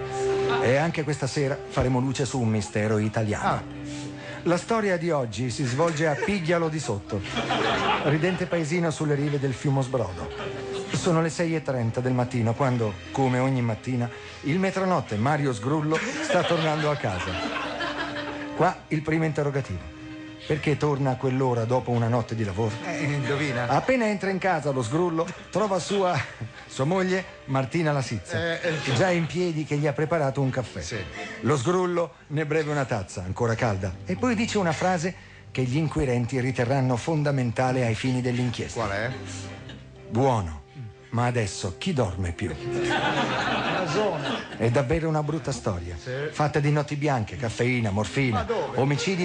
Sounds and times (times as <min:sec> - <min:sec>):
Music: 0:00.0 - 0:49.2.